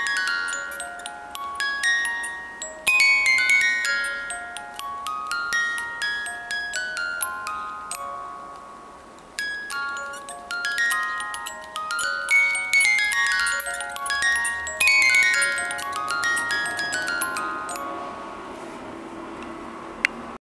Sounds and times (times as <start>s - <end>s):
Music: 0.0s - 18.5s.